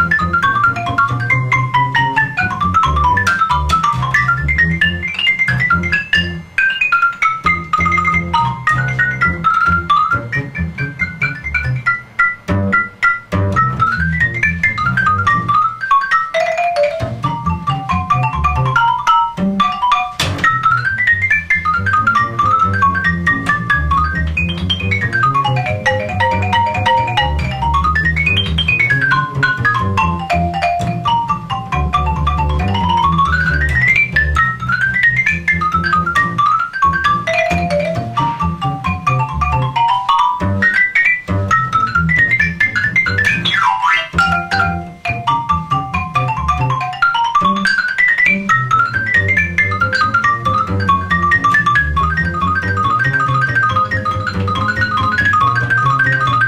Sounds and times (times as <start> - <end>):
Marimba, xylophone: 0.0 - 56.4.